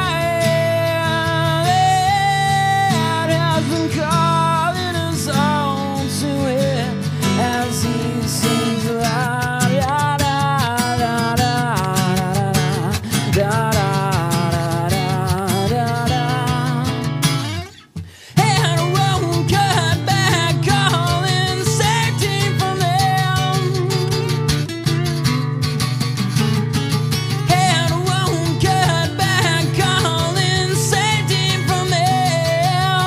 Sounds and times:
Music: 0:00.0 - 0:33.0.

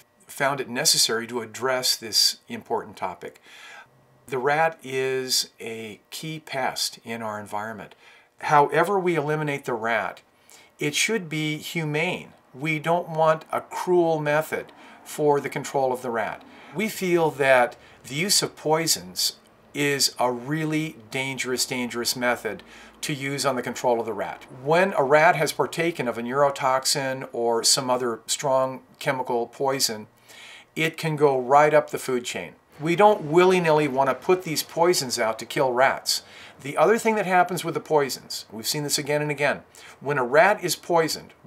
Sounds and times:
Speech: 0:00.0 - 0:03.4, 0:04.3 - 0:30.1, 0:30.8 - 0:41.4.

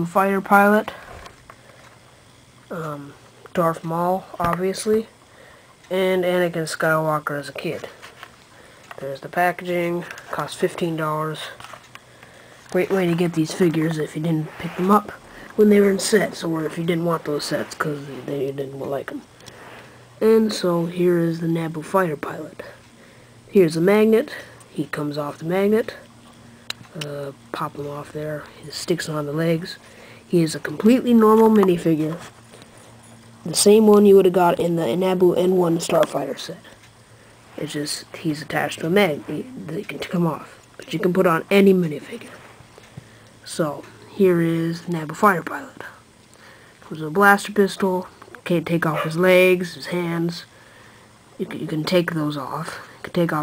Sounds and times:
Speech: 0:00.0 - 0:01.0, 0:02.7 - 0:05.1, 0:05.9 - 0:08.0, 0:09.0 - 0:11.7, 0:12.7 - 0:19.3, 0:20.2 - 0:22.8, 0:23.5 - 0:26.1, 0:26.8 - 0:32.3, 0:33.4 - 0:36.8, 0:37.6 - 0:42.5, 0:43.4 - 0:46.0, 0:46.8 - 0:50.5, 0:51.4 - 0:53.4
Inside, small room: 0:00.0 - 0:53.4.

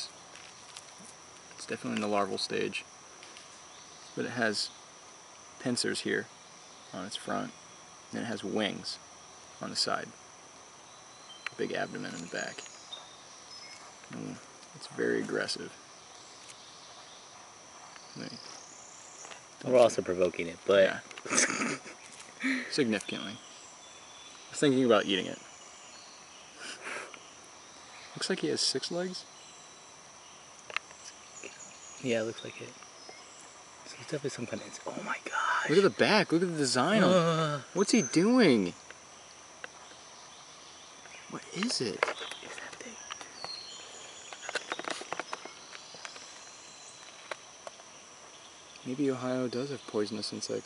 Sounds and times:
Speech: 0:01.6 - 0:02.8, 0:04.2 - 0:04.7, 0:11.6 - 0:12.6, 0:28.2 - 0:29.2, 0:32.0 - 0:32.8, 0:33.9 - 0:38.8, 0:48.8 - 0:50.6.

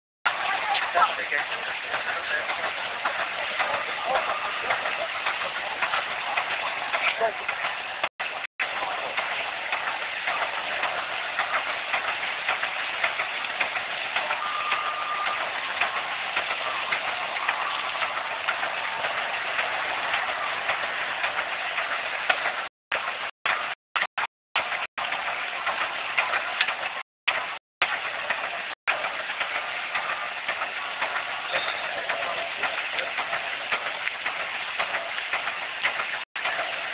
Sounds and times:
Heavy engine (low frequency): 0:00.3 - 0:23.8.

